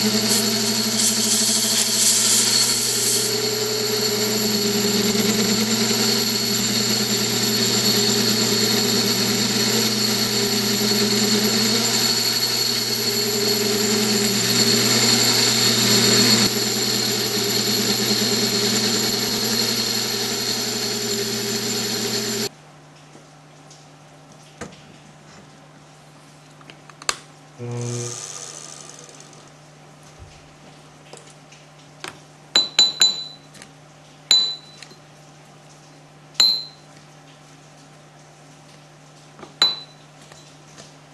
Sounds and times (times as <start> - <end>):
Power tool: 0.0 - 22.5, 27.6 - 29.6.